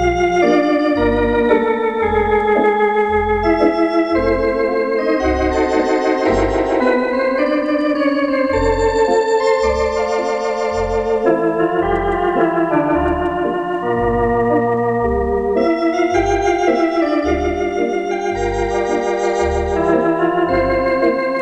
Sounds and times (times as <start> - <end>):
Hammond organ: 0.0 - 21.4.